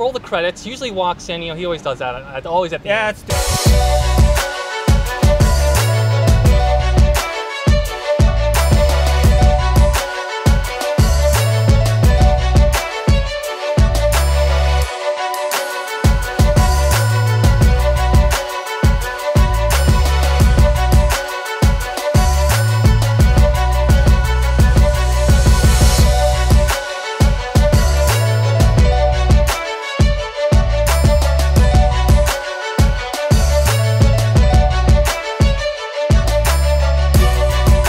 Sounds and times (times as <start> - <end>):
Music: 3.2 - 37.8.